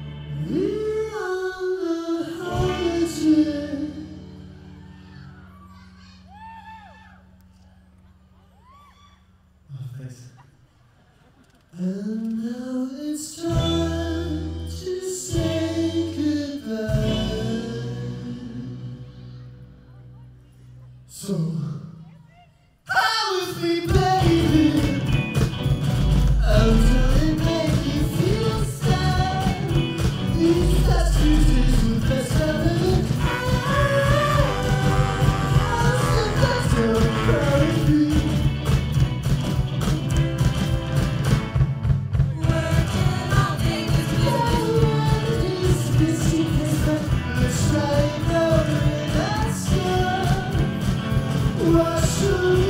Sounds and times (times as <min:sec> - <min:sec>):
Music: 0:00.0 - 0:09.5, 0:13.2 - 0:21.8, 0:23.4 - 0:52.6.